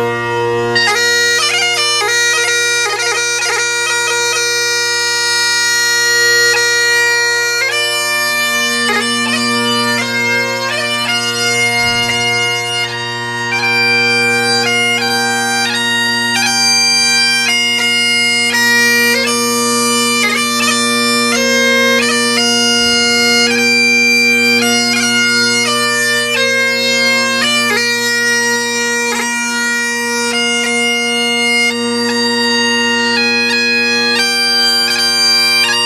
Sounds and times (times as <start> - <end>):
Bagpipes: 0.0 - 35.8.